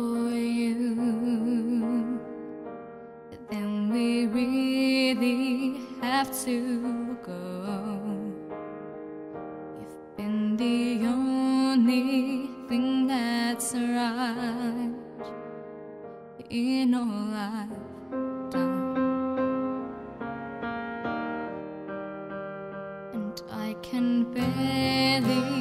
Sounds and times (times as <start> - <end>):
Music: 0.0 - 25.6.